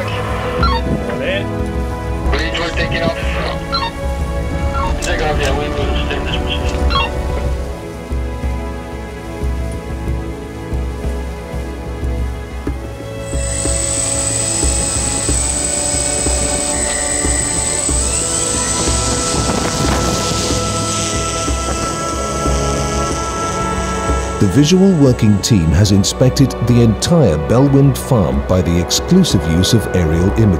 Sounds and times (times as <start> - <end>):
Music: 0.0 - 30.5
Speech: 2.3 - 3.6, 5.0 - 6.8, 24.4 - 30.5.